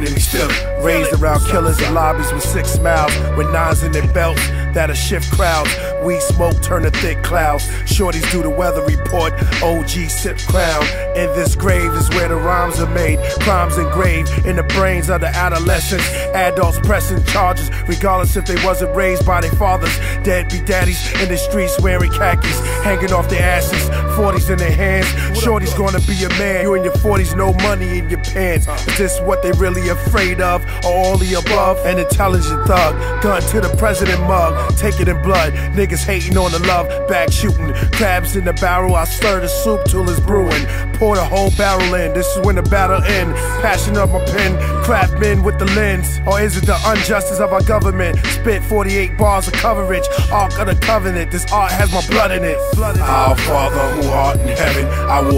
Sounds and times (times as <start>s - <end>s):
Hip hop music: 0.0s - 55.3s.